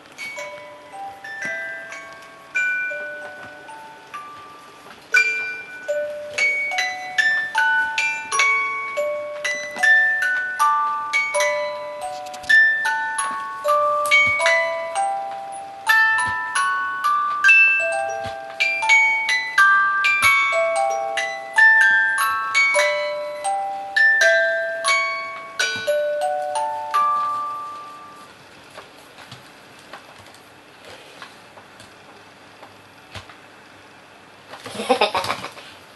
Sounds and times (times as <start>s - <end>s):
Glockenspiel: 0.0s - 28.4s
Chime: 0.1s - 28.3s
Marimba, xylophone: 0.2s - 28.3s.